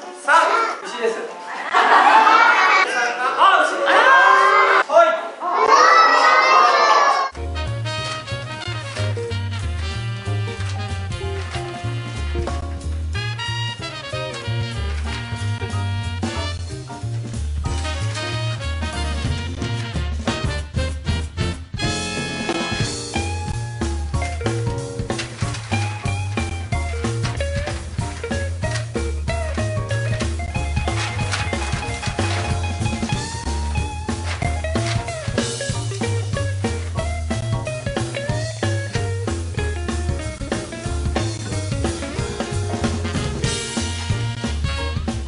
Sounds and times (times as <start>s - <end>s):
Music: 7.3s - 45.2s.